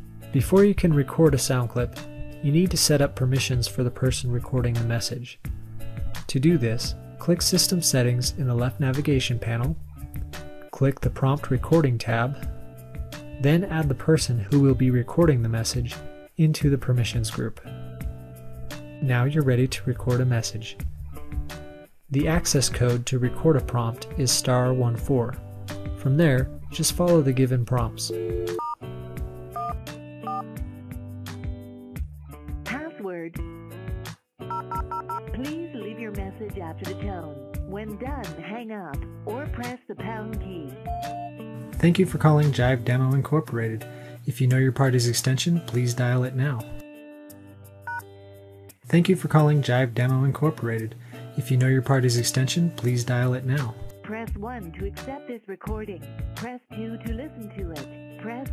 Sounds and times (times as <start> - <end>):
Music: 0.0 - 58.5
Speech: 0.4 - 5.4, 6.3 - 9.8, 10.7 - 12.4, 13.4 - 17.7, 19.0 - 20.8, 22.1 - 25.4, 26.0 - 28.2, 32.7 - 33.4, 35.3 - 40.8, 41.8 - 46.8, 48.9 - 58.5.